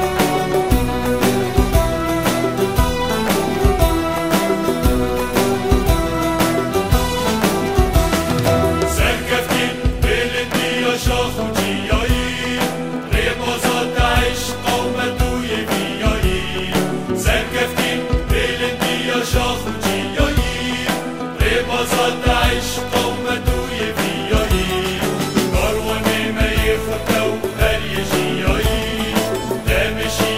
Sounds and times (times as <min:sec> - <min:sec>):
Music: 0:00.0 - 0:30.3.